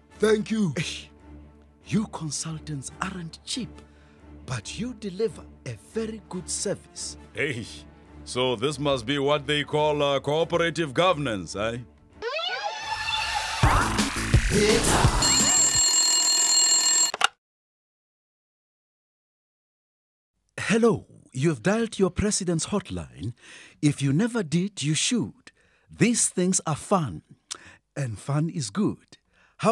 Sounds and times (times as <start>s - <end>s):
Music: 0.0s - 12.2s, 13.0s - 15.8s
Speech: 0.2s - 1.1s, 1.9s - 3.8s, 4.5s - 11.9s, 20.6s - 27.3s, 28.0s - 29.7s.